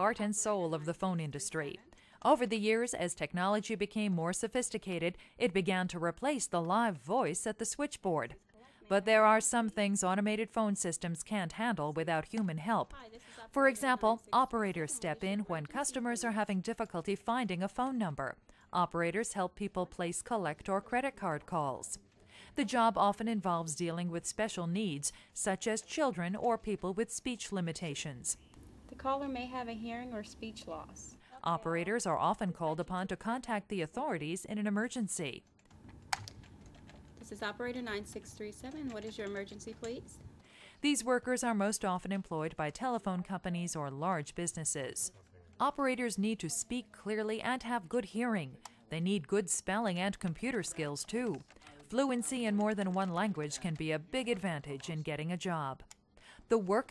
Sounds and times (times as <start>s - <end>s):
Speech: 0.0s - 35.4s, 37.2s - 40.2s, 40.8s - 55.8s, 56.5s - 56.9s.